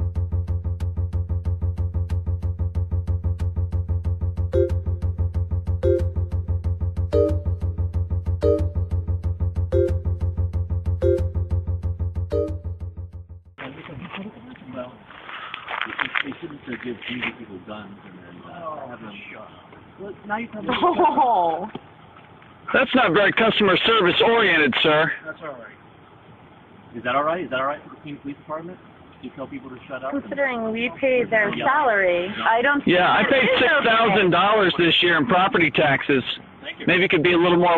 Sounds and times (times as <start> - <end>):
Conversation: 12.9 - 37.7
Male speech, man speaking: 13.6 - 15.1, 15.8 - 20.8, 22.7 - 25.8, 26.9 - 37.7.